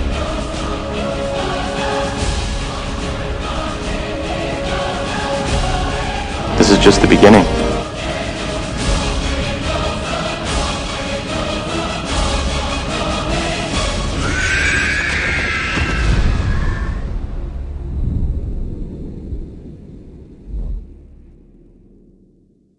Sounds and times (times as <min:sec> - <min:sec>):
Music: 0:00.0 - 0:22.7.